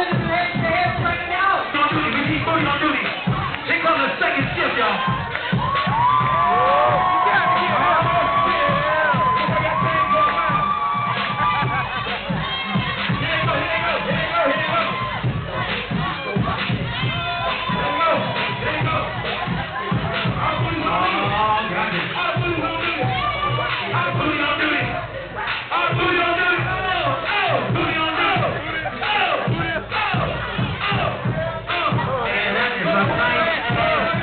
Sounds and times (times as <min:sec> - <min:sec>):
Music: 0:00.0 - 0:34.2.